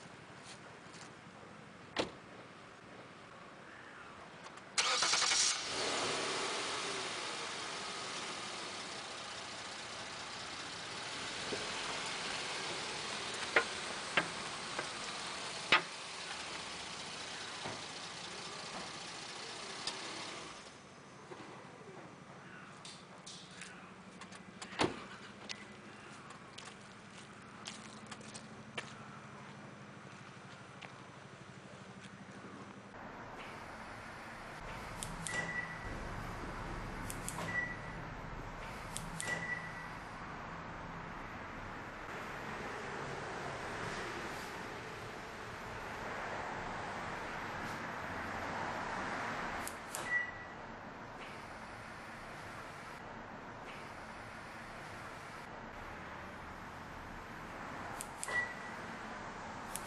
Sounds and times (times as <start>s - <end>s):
Car: 0.0s - 59.8s.